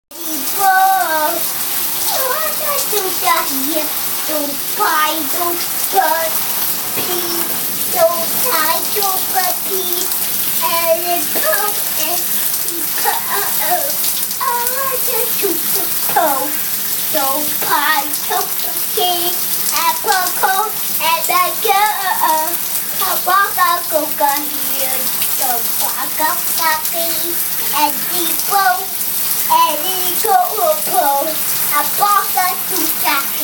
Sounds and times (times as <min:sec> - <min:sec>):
Inside, small room: 0:00.1 - 0:33.4.